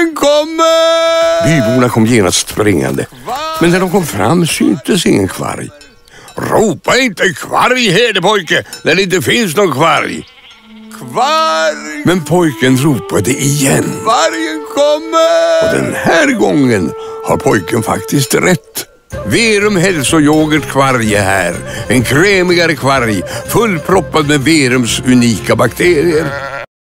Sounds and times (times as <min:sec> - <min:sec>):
Speech: 0:00.0 - 0:10.2, 0:11.0 - 0:26.4
Music: 0:10.7 - 0:26.5.